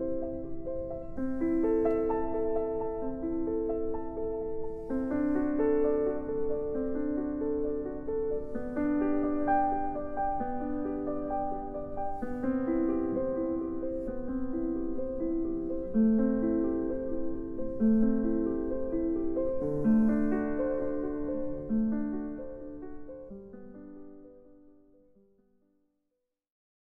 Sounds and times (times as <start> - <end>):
Classical music: 0.0 - 25.0.